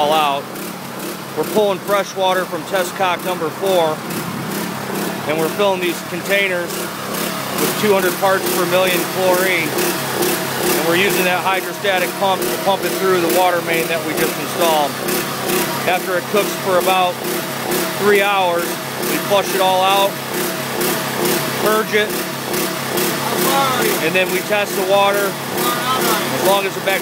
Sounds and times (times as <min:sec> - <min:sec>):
Speech: 0:00.0 - 0:00.4, 0:01.4 - 0:04.0, 0:05.3 - 0:06.7, 0:07.6 - 0:09.7, 0:10.8 - 0:15.0, 0:15.9 - 0:17.2, 0:18.0 - 0:20.2, 0:21.6 - 0:22.1, 0:23.3 - 0:27.0.